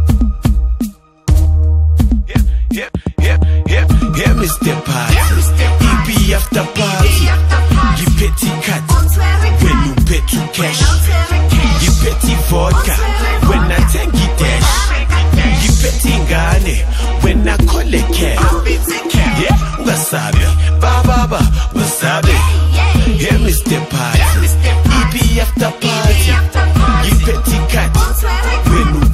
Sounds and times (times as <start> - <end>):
New-age music: 12.2 - 22.9.